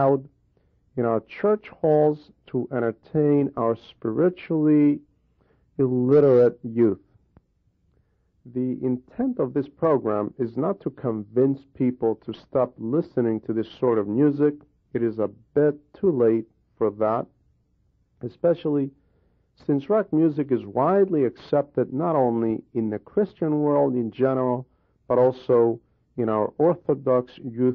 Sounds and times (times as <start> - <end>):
Speech: 0.0 - 0.3, 1.0 - 5.1, 5.8 - 7.1, 8.5 - 17.3, 18.2 - 19.0, 19.6 - 27.7.